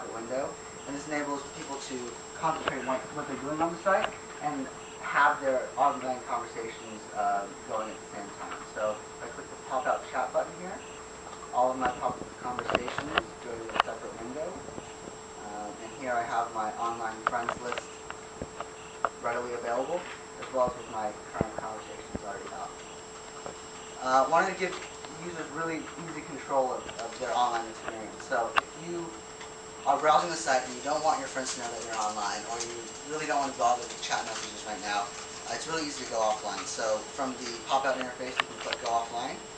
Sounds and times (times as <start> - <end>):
Speech: 0.0 - 10.8, 11.6 - 14.7, 15.4 - 17.8, 19.2 - 22.8, 24.0 - 29.2, 29.8 - 39.4.